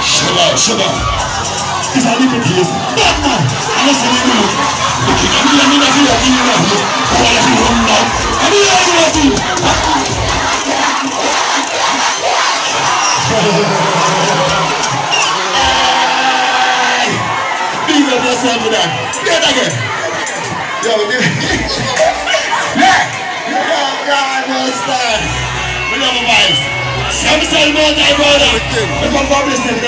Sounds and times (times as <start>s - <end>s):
Music: 0.0s - 12.1s, 25.2s - 29.8s
Inside, public space: 0.0s - 29.8s
Speech: 26.0s - 29.8s.